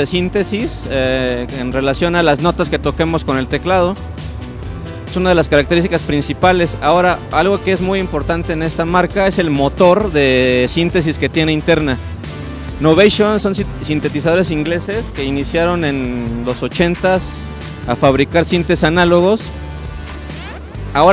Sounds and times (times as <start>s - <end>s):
Speech: 0.0s - 4.0s, 5.1s - 12.0s, 12.8s - 19.5s
Music: 0.0s - 21.1s.